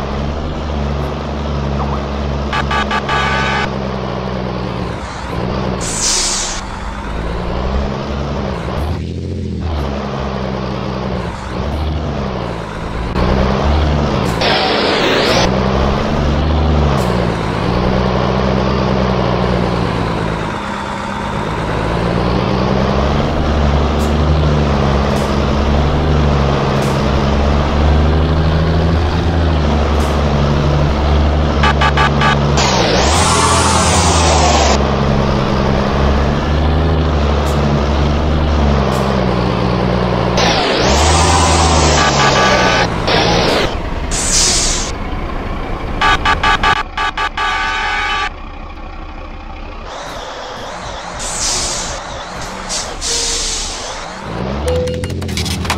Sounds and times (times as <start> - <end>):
Truck: 0.0 - 55.7.